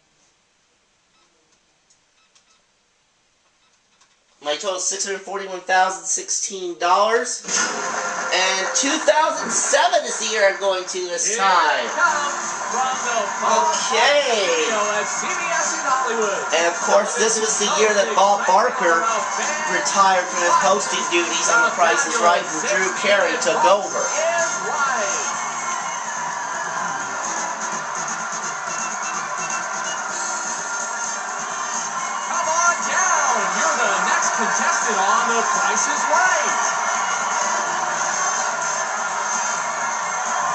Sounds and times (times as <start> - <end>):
Speech: 4.4 - 7.5, 8.3 - 25.2, 32.4 - 36.6
Music: 7.5 - 40.5.